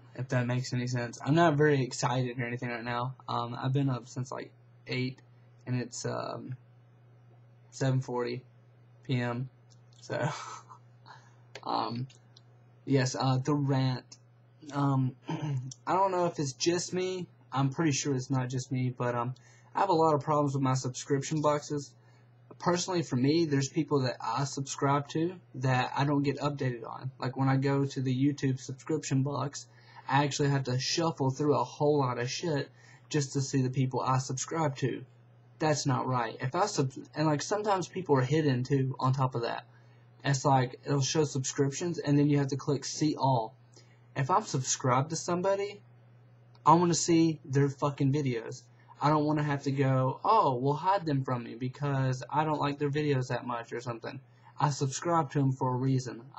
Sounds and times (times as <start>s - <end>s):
Speech: 0.0s - 6.6s, 7.7s - 8.5s, 9.1s - 43.6s, 44.2s - 45.9s, 46.6s - 56.3s.